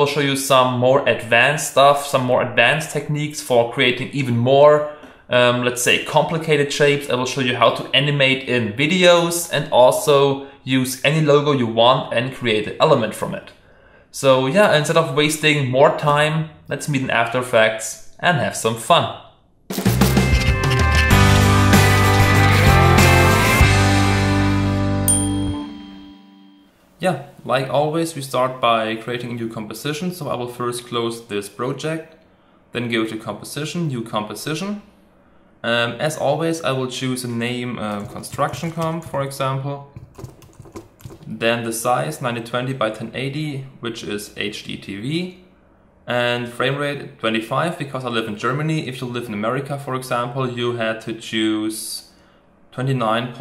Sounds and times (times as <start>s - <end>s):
Computer keyboard: 37.9s - 39.3s, 40.0s - 41.4s.